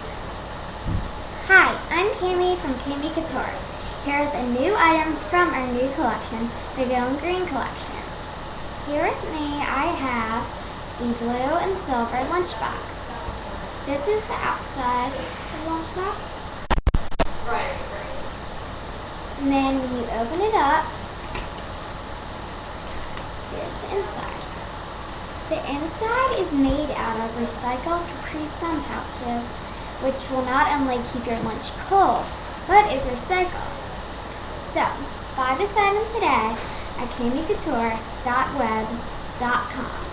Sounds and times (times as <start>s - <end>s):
Speech: 1.4s - 8.1s, 8.9s - 16.5s, 17.5s - 18.3s, 19.4s - 20.9s, 23.5s - 24.5s, 25.5s - 33.8s, 34.6s - 40.1s.